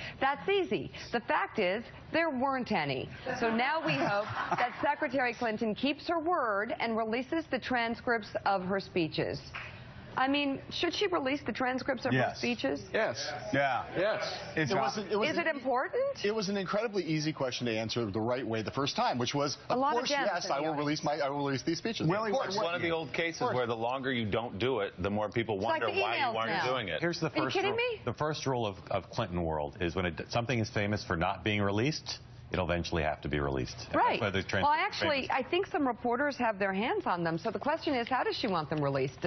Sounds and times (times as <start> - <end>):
Conversation: 0.0 - 39.2
Female speech, woman speaking: 0.2 - 9.5, 10.2 - 12.9, 14.6 - 16.2, 19.7 - 20.9, 25.6 - 26.8, 27.4 - 28.0, 33.9 - 39.2
Male speech, man speaking: 12.1 - 15.6, 16.2 - 35.3.